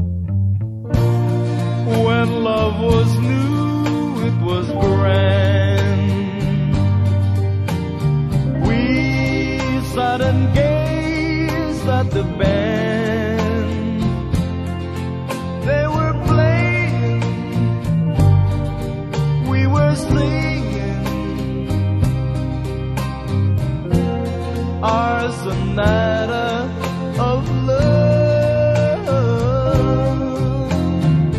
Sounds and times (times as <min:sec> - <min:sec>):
Music: 0:00.0 - 0:31.3.